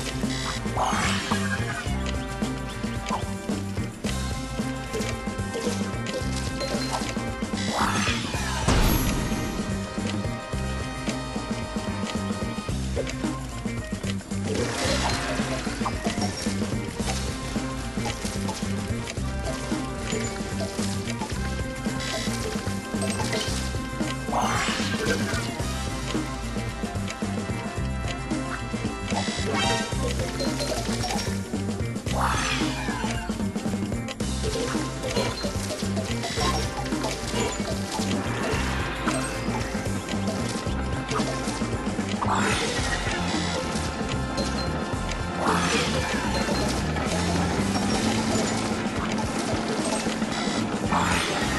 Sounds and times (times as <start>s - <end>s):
Music: 0.0s - 51.5s.